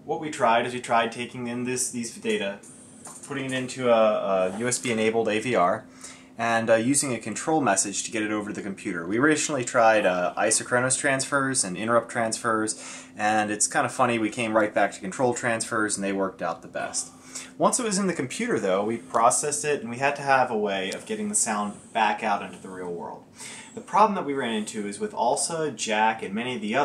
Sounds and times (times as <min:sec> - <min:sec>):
Speech: 0:00.0 - 0:02.6, 0:03.2 - 0:05.8, 0:06.4 - 0:26.8.